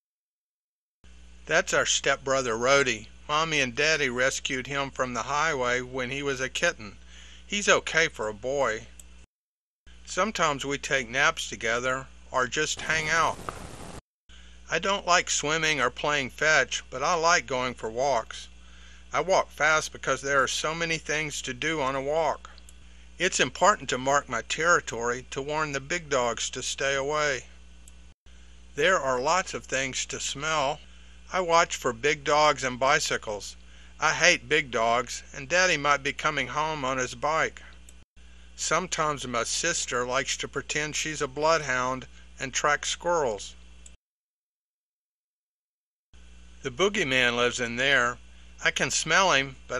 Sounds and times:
Speech: 1.5 - 9.0, 10.1 - 13.4, 14.7 - 18.5, 19.1 - 22.6, 23.2 - 27.6, 28.8 - 37.8, 38.6 - 43.6, 46.7 - 49.7.

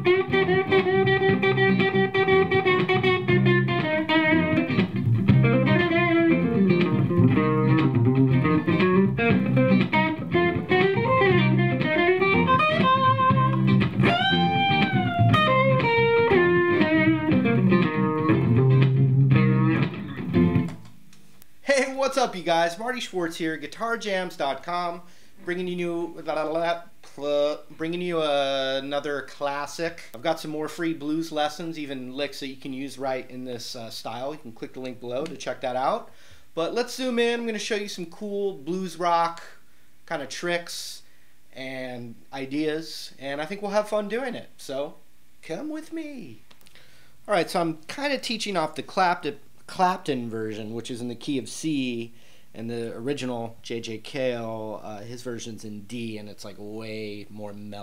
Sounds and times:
Speech: 21.6 - 46.4, 47.3 - 57.8.

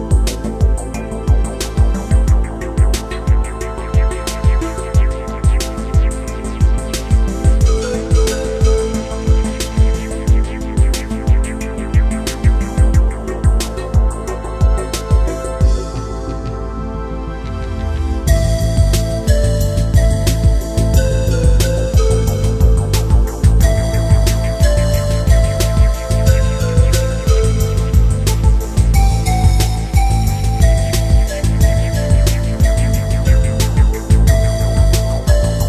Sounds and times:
Music: 0.0 - 35.6.

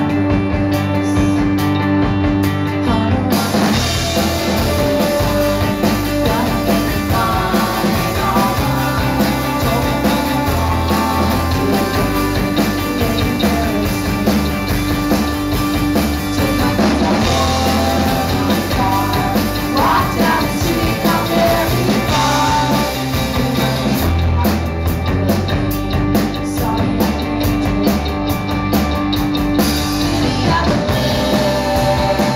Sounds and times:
Music: 0.0 - 32.3.

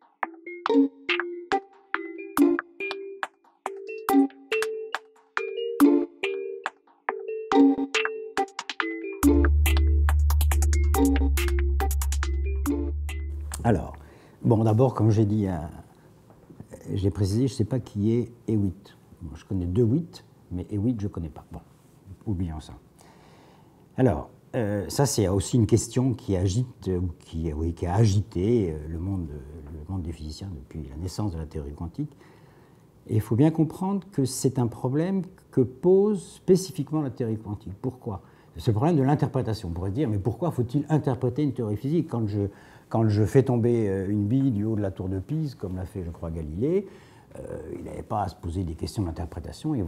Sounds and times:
Music: 0.0 - 13.9
Speech: 13.6 - 15.9, 16.6 - 22.8, 24.0 - 32.2, 33.1 - 49.8.

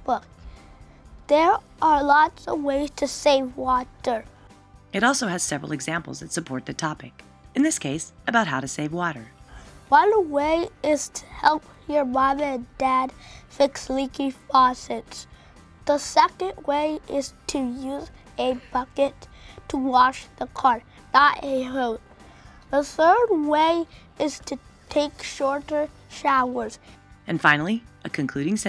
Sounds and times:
Music: 0.0 - 28.6
Speech: 5.0 - 9.3, 22.8 - 28.6.

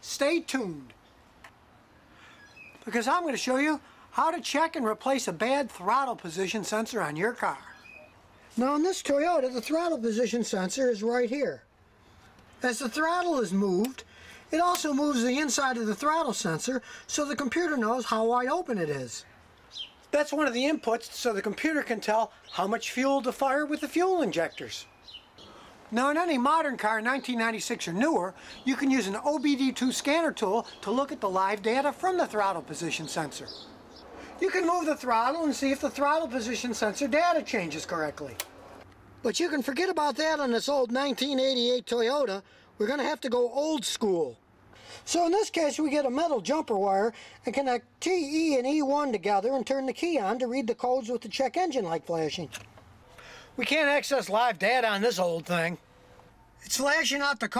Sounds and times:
Speech: 0.0 - 1.0, 2.8 - 7.8, 8.5 - 11.7, 12.6 - 19.3, 20.1 - 24.9, 25.9 - 33.6, 34.4 - 38.4, 39.2 - 44.4, 45.1 - 52.6, 53.6 - 55.8, 56.6 - 57.5.

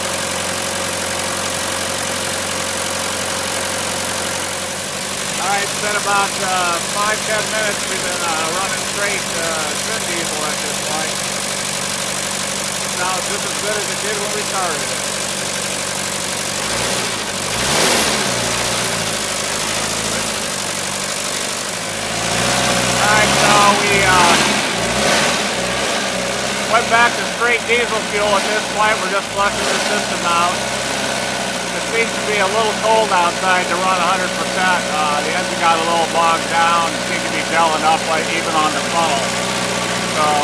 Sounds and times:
Heavy engine (low frequency): 0.0 - 40.4
Vehicle: 0.0 - 40.4
Speech: 5.4 - 11.2, 13.0 - 14.9, 23.0 - 24.4, 26.7 - 30.6, 31.8 - 39.3, 40.2 - 40.4.

